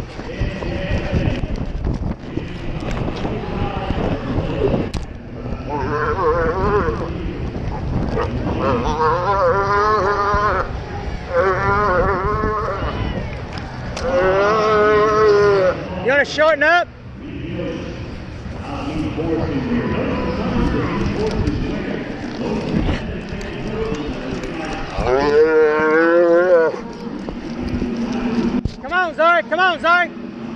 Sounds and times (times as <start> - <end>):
Moo: 5.7 - 7.1, 8.6 - 10.7, 11.3 - 13.0, 14.0 - 15.8, 25.0 - 26.8.